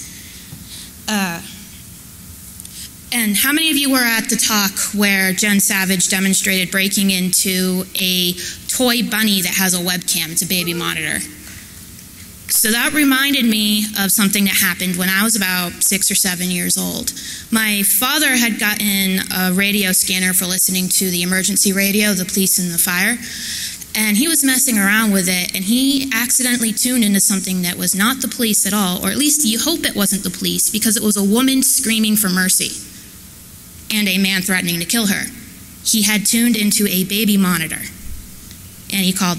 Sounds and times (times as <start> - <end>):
Speech: 1.1 - 1.7, 3.1 - 11.4, 12.5 - 23.3, 23.9 - 32.9, 33.9 - 38.0, 38.9 - 39.3.